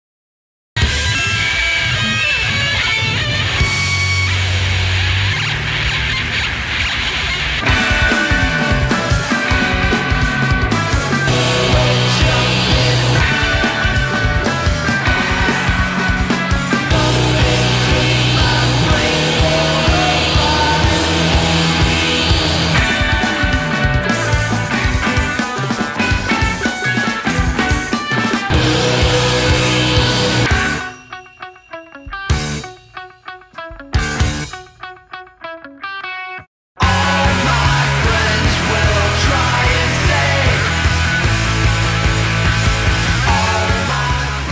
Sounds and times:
Music: 0.8s - 44.5s.

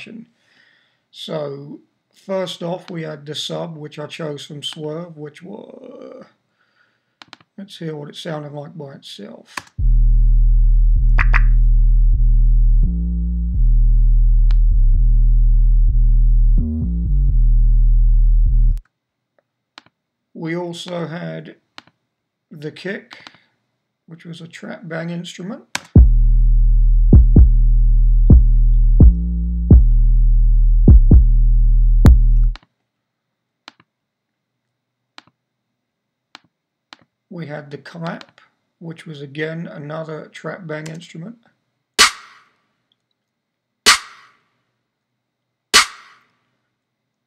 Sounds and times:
Speech: 0.0s - 0.3s, 1.2s - 6.4s, 7.6s - 9.7s, 20.3s - 21.6s, 22.5s - 23.3s, 24.1s - 25.8s, 37.3s - 41.6s
Music: 9.8s - 18.8s, 26.0s - 32.6s.

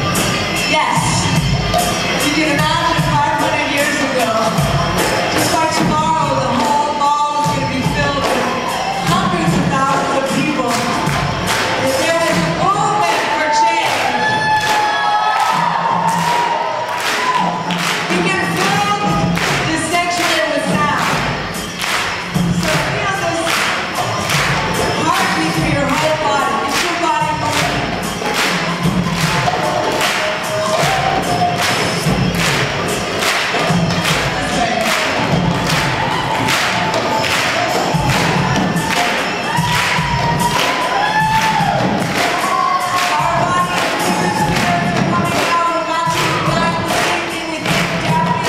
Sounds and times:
Crowd: 0.0s - 48.4s.

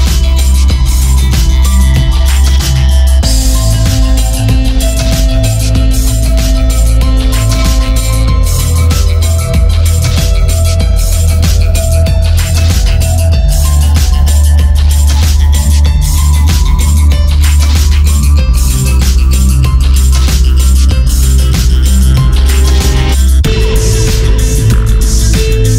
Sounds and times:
Trance music: 0.0s - 25.7s.

